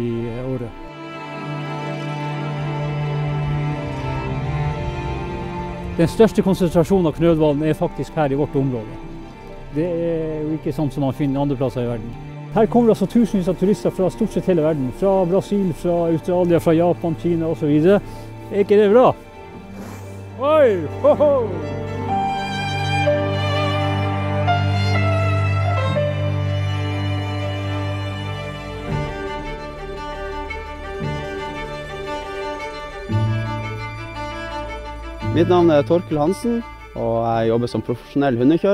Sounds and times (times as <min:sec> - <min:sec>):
Speech: 0:00.0 - 0:00.8, 0:06.0 - 0:08.9, 0:09.8 - 0:19.2, 0:20.4 - 0:21.6, 0:35.4 - 0:38.7
Music: 0:00.0 - 0:38.7.